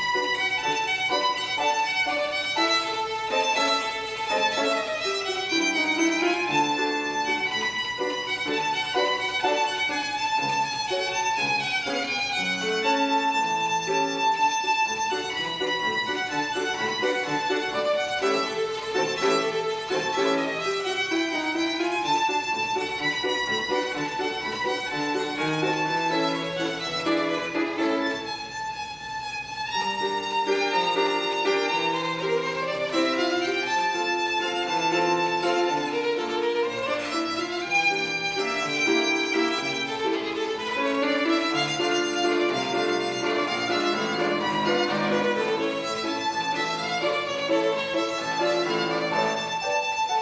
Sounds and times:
Violin, fiddle: 0.0s - 50.2s.

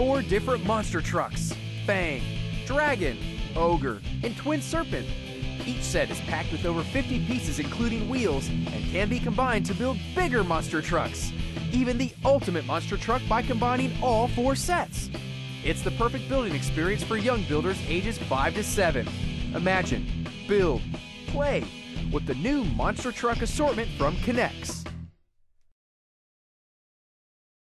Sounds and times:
Speech: 0.0s - 24.9s
Music: 0.0s - 25.3s.

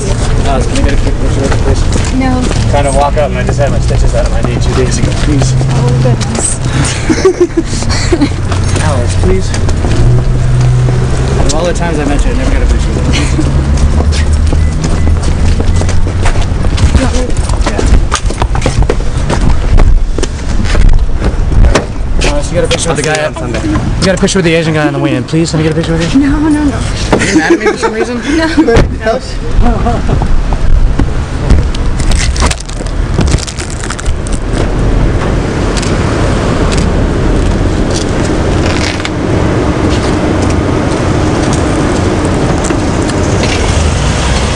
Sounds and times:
Car: 0.0s - 44.5s.

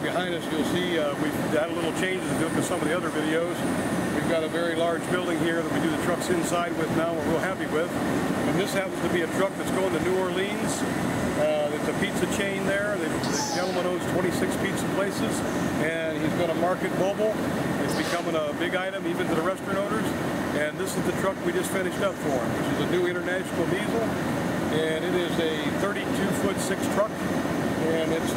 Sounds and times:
Speech: 0.0s - 27.2s, 27.8s - 28.3s.

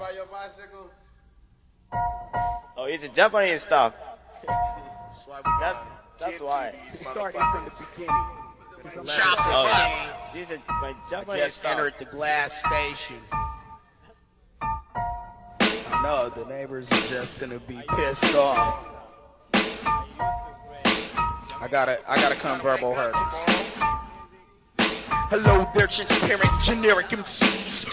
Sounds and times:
Music: 1.9s - 3.1s, 4.3s - 27.9s
Speech: 4.5s - 13.3s, 16.0s - 18.9s, 21.5s - 23.9s, 25.3s - 27.9s.

